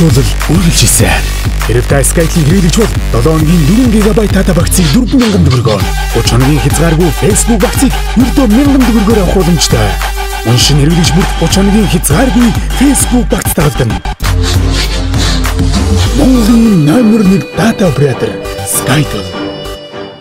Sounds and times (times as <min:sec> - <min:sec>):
Speech: 0:00.0 - 0:14.0, 0:16.2 - 0:19.4
Music: 0:00.0 - 0:20.2.